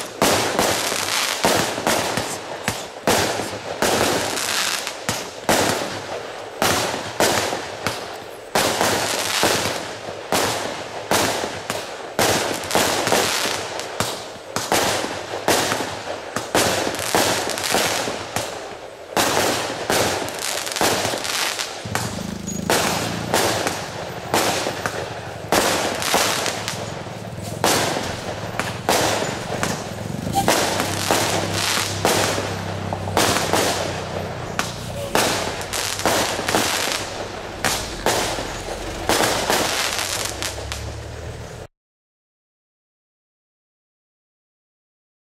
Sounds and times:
Burst, pop: 0:19.2 - 0:40.9.

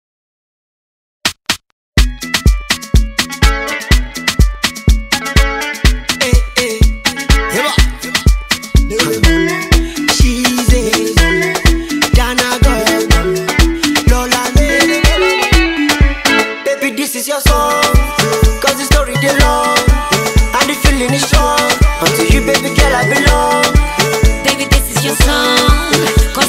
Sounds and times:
Afrobeat: 0:02.0 - 0:26.4.

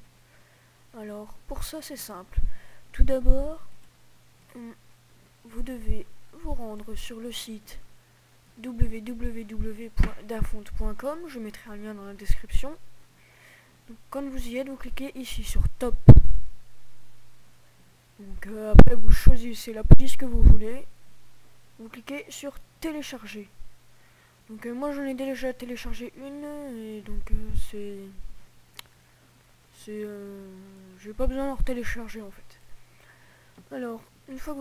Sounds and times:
Speech: 0:00.9 - 0:03.8, 0:04.5 - 0:04.8, 0:05.4 - 0:07.9, 0:08.6 - 0:12.8, 0:13.9 - 0:16.1, 0:18.2 - 0:21.0, 0:21.8 - 0:23.6, 0:24.5 - 0:28.2, 0:29.7 - 0:32.6, 0:33.7 - 0:34.6.

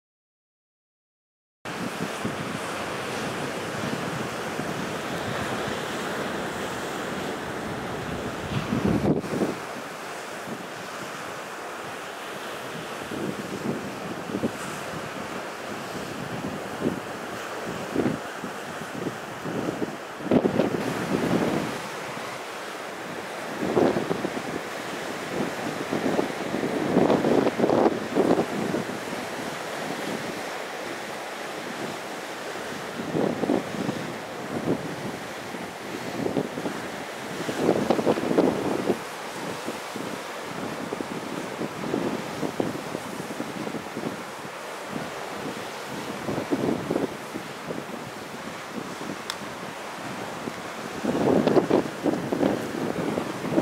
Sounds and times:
Wind noise (microphone): 0:01.7 - 0:11.4, 0:12.5 - 0:22.4, 0:23.1 - 0:53.6
Waves, surf: 0:01.7 - 0:53.6.

